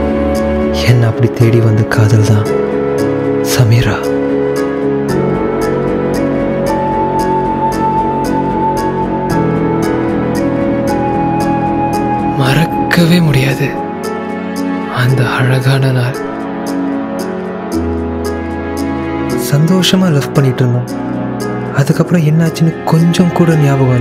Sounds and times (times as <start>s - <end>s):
Music: 0.0s - 24.0s
Speech: 0.8s - 2.5s, 3.5s - 4.1s, 19.4s - 20.9s, 21.8s - 24.0s.